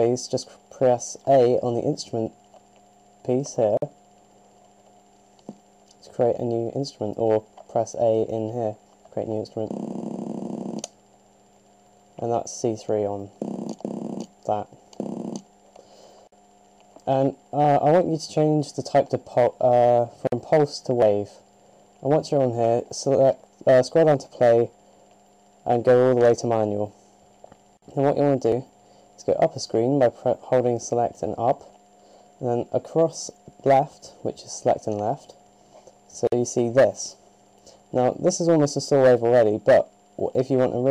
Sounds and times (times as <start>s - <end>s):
Speech: 0.0s - 2.4s, 3.2s - 3.9s, 6.0s - 9.8s, 12.2s - 13.4s, 14.5s - 14.8s, 17.0s - 21.4s, 22.0s - 24.8s, 25.6s - 27.0s, 27.9s - 31.8s, 32.4s - 35.4s, 36.1s - 37.2s, 37.9s - 40.9s.